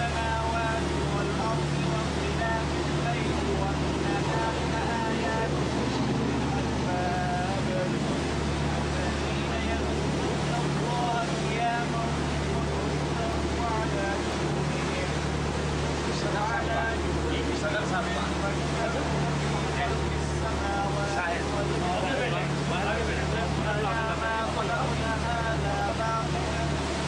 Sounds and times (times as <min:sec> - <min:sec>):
Speech: 0:00.0 - 0:05.8, 0:06.4 - 0:08.0, 0:08.6 - 0:15.3, 0:16.0 - 0:27.0
Motorboat, speedboat: 0:00.0 - 0:27.0.